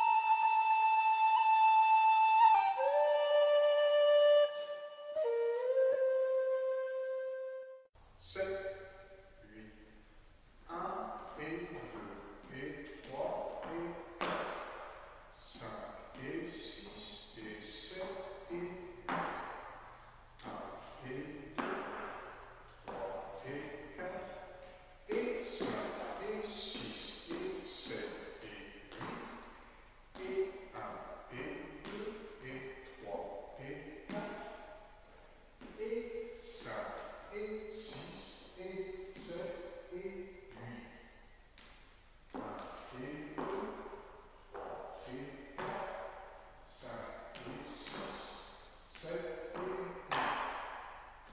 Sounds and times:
Speech: 8.2 - 8.8, 9.4 - 9.8, 10.7 - 14.0, 15.4 - 18.9, 20.4 - 21.6, 22.9 - 24.4, 25.1 - 29.3, 30.2 - 34.5, 35.7 - 41.0, 42.4 - 43.8, 45.0 - 46.0, 46.7 - 50.0.

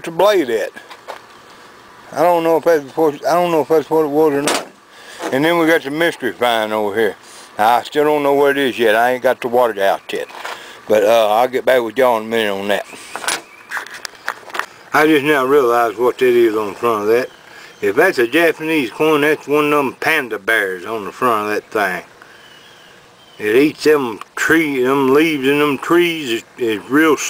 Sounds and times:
Speech: 0.0 - 0.8, 2.1 - 4.7, 5.3 - 13.0, 14.9 - 22.1, 23.4 - 27.3.

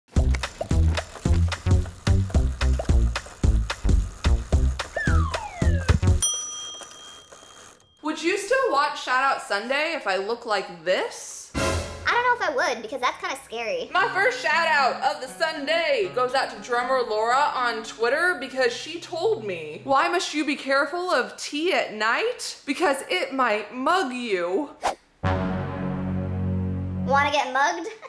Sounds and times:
Music: 0.1 - 6.2, 11.5 - 12.4, 13.9 - 20.1, 25.2 - 27.4.

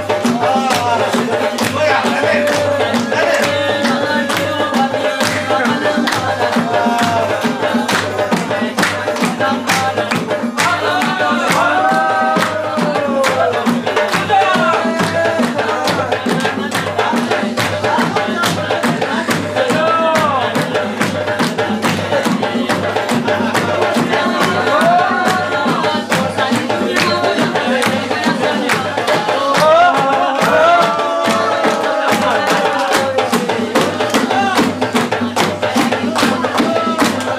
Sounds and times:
Music: 0.0 - 37.3.

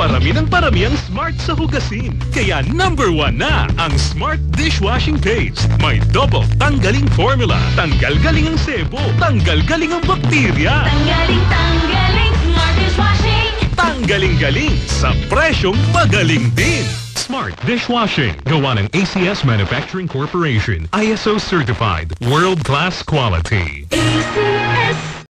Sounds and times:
Speech: 0.0 - 11.1, 13.8 - 25.0
Music: 0.0 - 25.2
Radio: 15.5 - 25.0.

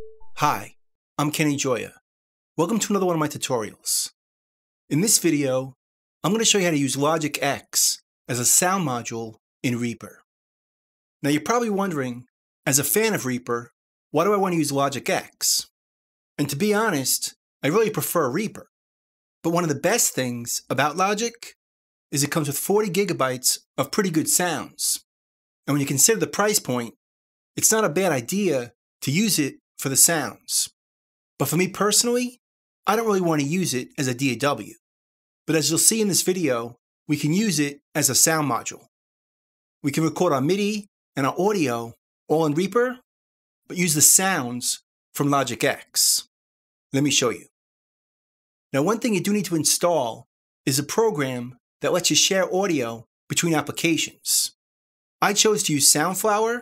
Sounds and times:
Speech: 0.0 - 2.0, 2.6 - 4.2, 4.9 - 10.2, 11.2 - 15.8, 16.4 - 18.7, 19.5 - 21.6, 22.2 - 25.1, 25.7 - 27.0, 27.6 - 30.8, 31.4 - 34.8, 35.5 - 38.9, 39.9 - 43.1, 43.7 - 46.3, 47.0 - 47.5, 48.8 - 54.6, 55.2 - 56.6.

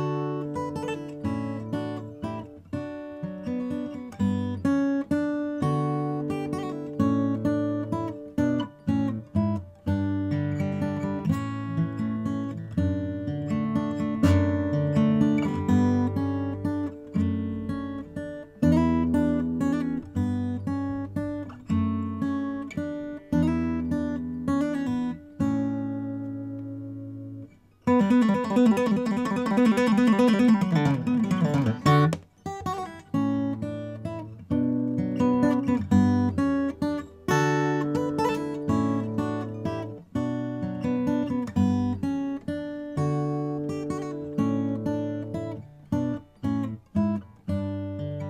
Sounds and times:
Acoustic guitar: 0.0 - 48.3.

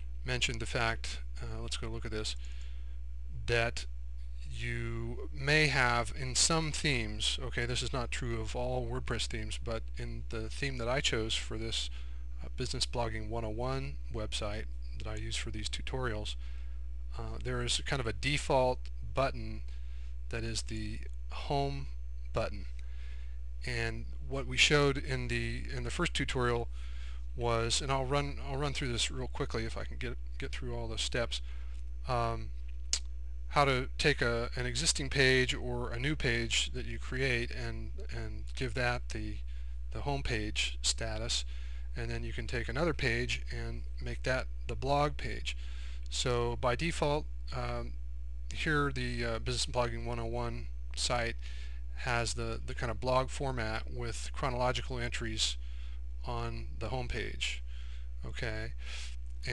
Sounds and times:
Speech: 0.2 - 2.4, 3.3 - 3.9, 4.5 - 16.4, 17.1 - 19.7, 20.3 - 22.8, 23.6 - 26.7, 27.4 - 51.4, 52.0 - 55.6, 56.2 - 57.6, 58.2 - 58.8.

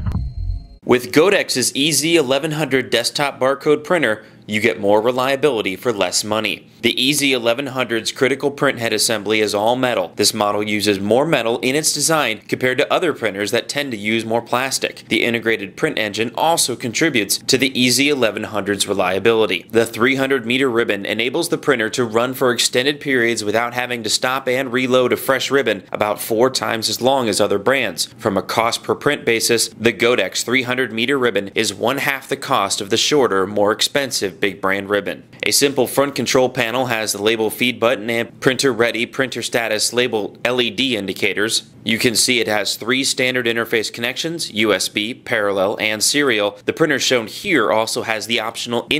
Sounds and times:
Speech: 0.8 - 48.9.

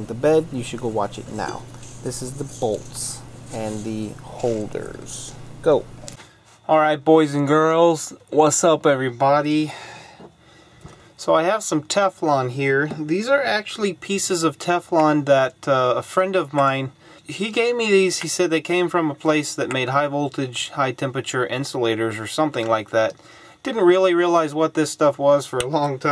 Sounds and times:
Speech: 0.0 - 5.9, 6.6 - 9.9, 11.2 - 26.1.

